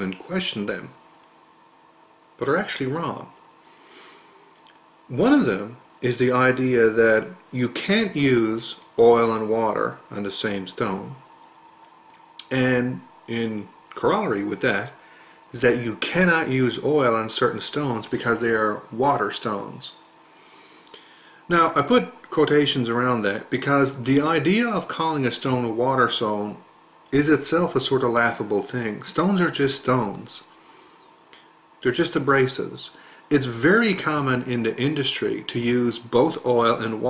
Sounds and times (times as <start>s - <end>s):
Speech: 0.0s - 1.0s, 2.4s - 3.4s, 5.1s - 11.2s, 12.4s - 20.0s, 21.5s - 30.5s, 31.8s - 37.0s.